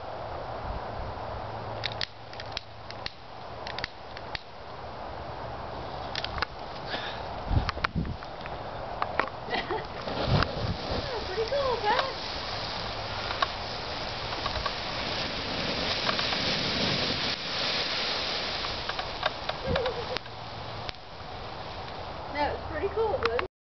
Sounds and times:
Speech: 11.0 - 12.2, 22.3 - 23.5.

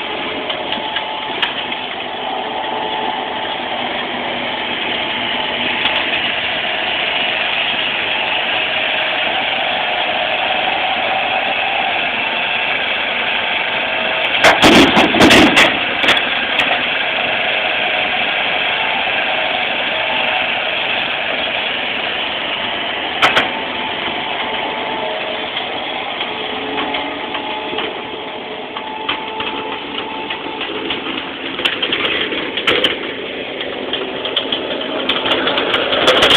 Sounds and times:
Vehicle: 0.0 - 36.3.

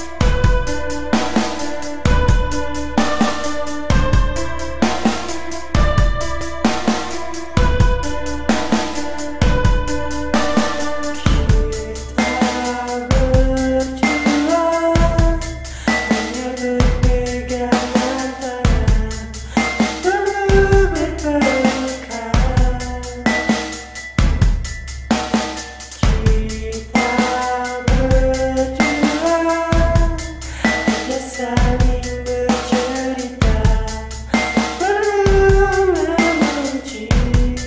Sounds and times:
Music: 0.0 - 37.6.

